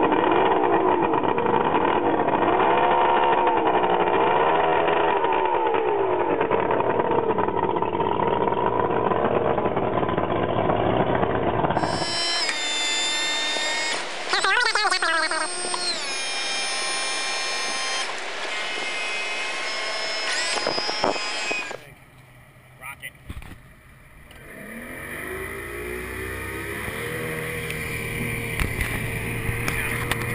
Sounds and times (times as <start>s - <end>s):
Motorboat, speedboat: 0.0s - 12.4s, 14.1s - 15.8s, 24.3s - 30.3s.